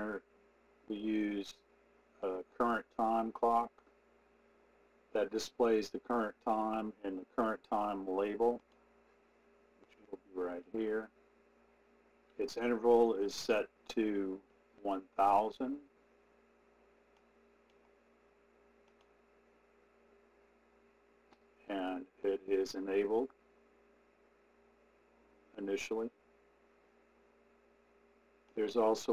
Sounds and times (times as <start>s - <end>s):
Speech: 0.0s - 0.2s, 0.9s - 1.6s, 2.2s - 3.8s, 5.2s - 8.6s, 10.0s - 11.2s, 12.4s - 15.9s, 21.6s - 23.4s, 25.5s - 26.2s, 28.6s - 29.1s.